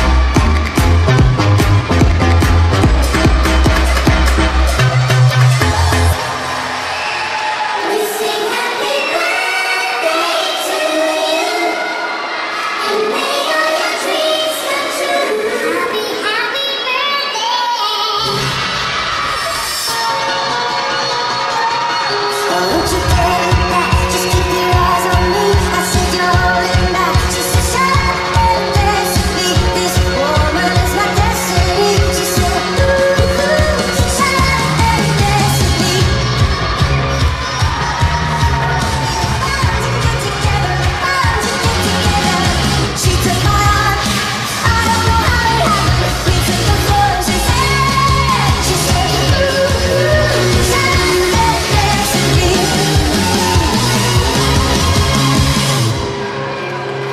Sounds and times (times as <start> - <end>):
Music: 0.0 - 57.1
Singing: 7.8 - 55.5.